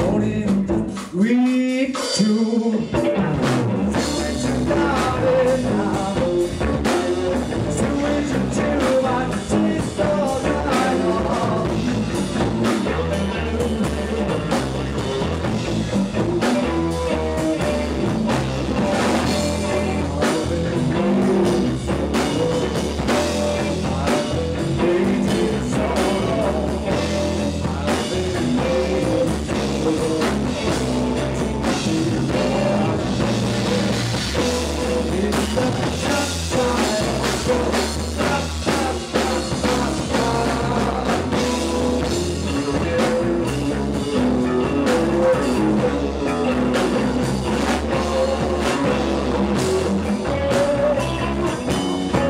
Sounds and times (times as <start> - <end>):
Drum kit: 0.0 - 52.2
Guitar: 0.0 - 52.2
Psychedelic rock: 0.0 - 52.2.